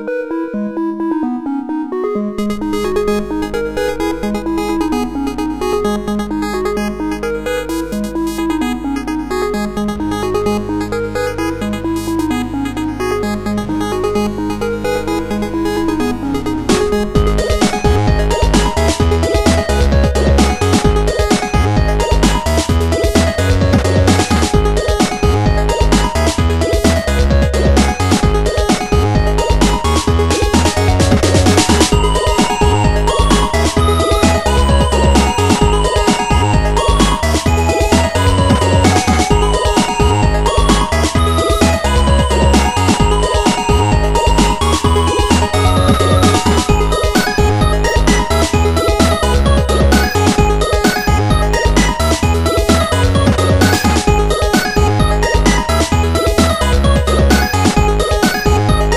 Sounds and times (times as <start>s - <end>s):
Music: 0.0s - 58.9s.